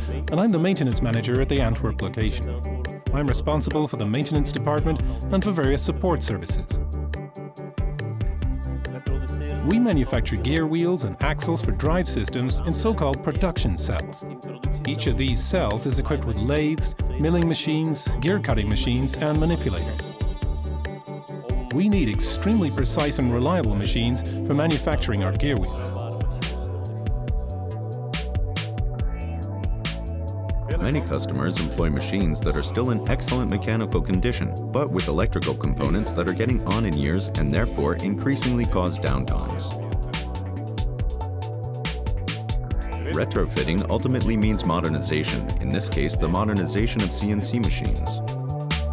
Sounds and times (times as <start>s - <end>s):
Speech: 0.0s - 6.8s, 9.0s - 20.1s, 21.5s - 26.2s, 30.7s - 39.8s, 43.0s - 48.2s
Music: 0.0s - 48.9s.